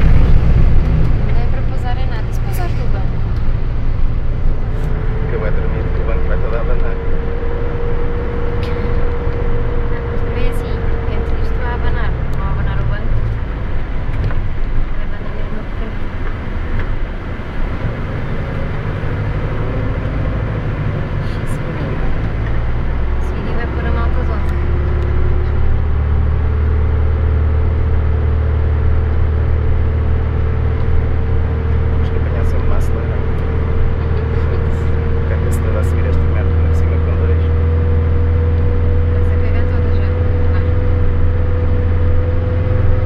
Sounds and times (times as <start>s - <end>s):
Bus: 0.0s - 43.0s.